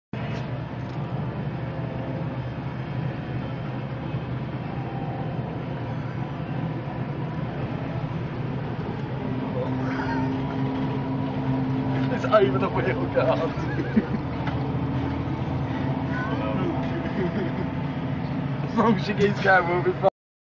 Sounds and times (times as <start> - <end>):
Speech: 18.7 - 20.1.